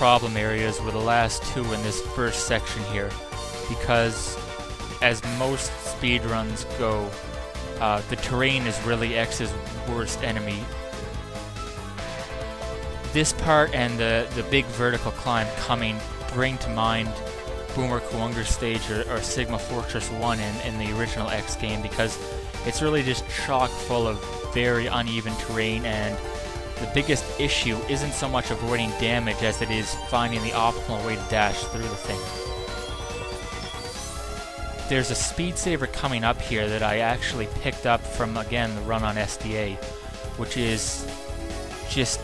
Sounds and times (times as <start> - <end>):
Speech: 0.0 - 4.4, 5.0 - 7.2, 7.8 - 10.7, 13.2 - 26.2, 26.8 - 32.4, 34.9 - 39.8, 40.4 - 41.0, 41.9 - 42.2
Music: 0.0 - 42.2.